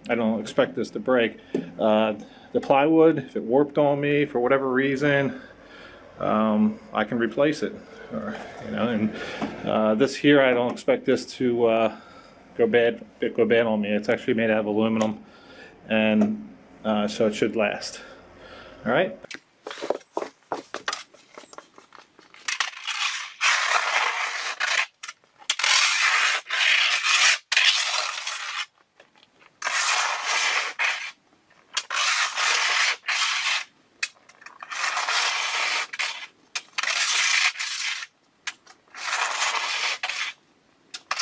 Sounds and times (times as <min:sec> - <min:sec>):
Speech: 0:00.0 - 0:05.4, 0:06.2 - 0:12.0, 0:12.6 - 0:15.2, 0:15.9 - 0:18.1, 0:18.8 - 0:19.3.